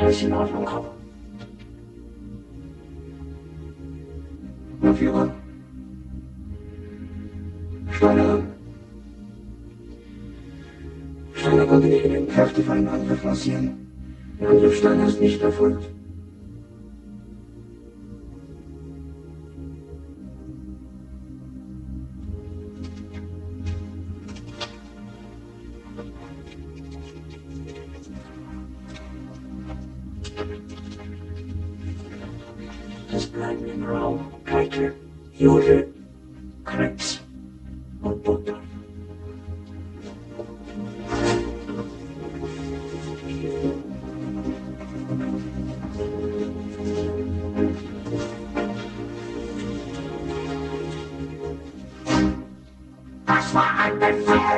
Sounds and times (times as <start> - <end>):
Speech: 0.0 - 1.0, 4.8 - 5.4, 7.9 - 8.5, 11.4 - 13.8, 14.4 - 15.9, 33.1 - 35.9, 36.7 - 37.2, 38.0 - 38.7, 53.3 - 54.5
Music: 0.0 - 54.5.